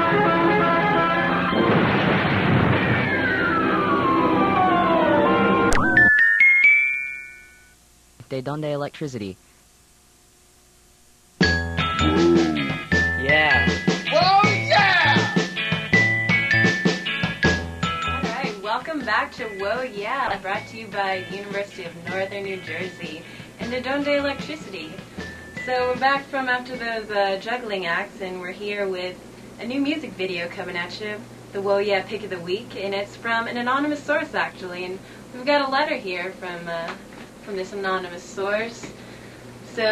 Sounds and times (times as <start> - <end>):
Background music: 0.0 - 2.0, 2.8 - 7.7, 11.4 - 27.2.